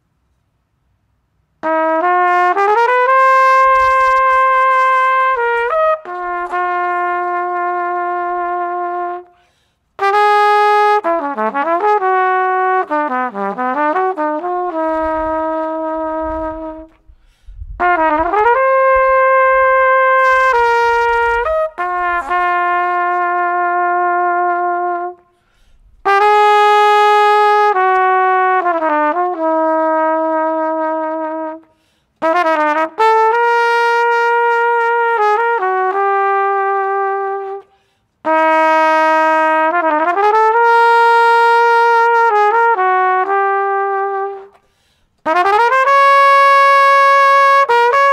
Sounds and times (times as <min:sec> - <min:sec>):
Trumpet: 0:01.6 - 0:48.1.